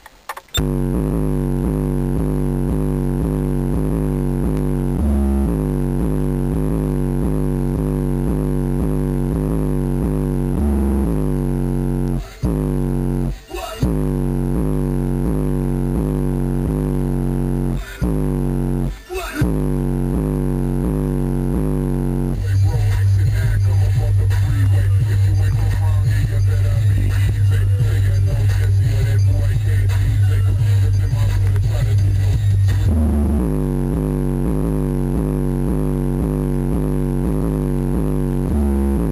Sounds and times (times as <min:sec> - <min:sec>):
Music: 0:02.1 - 0:17.0, 0:17.6 - 0:39.1.